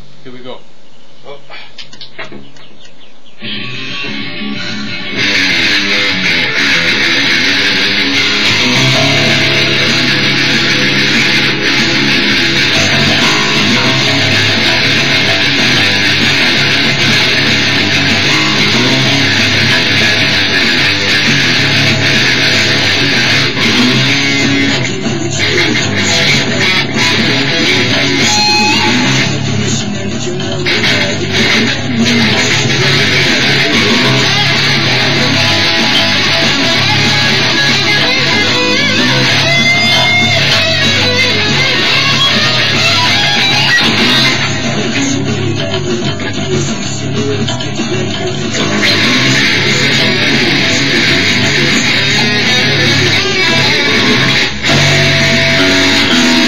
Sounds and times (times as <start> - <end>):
Strum: 3.4 - 29.9, 30.5 - 56.4
Acoustic guitar: 3.4 - 56.4
Electric guitar: 3.4 - 56.4.